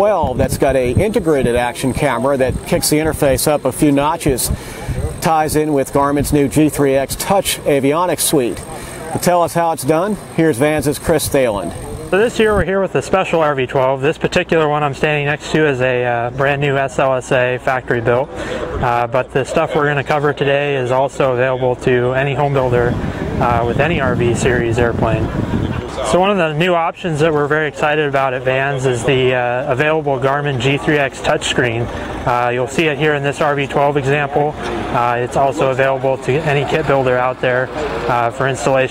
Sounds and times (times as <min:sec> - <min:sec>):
Speech: 0:00.0 - 0:38.9.